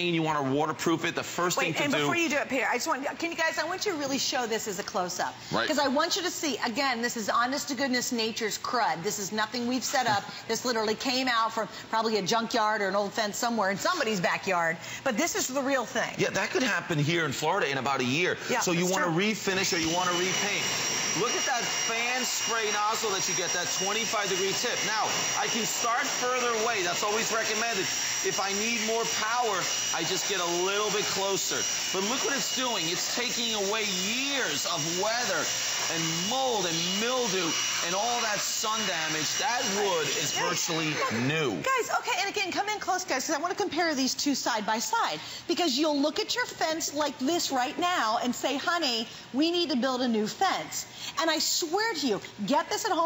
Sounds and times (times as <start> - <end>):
Power tool: 18.3 - 42.0.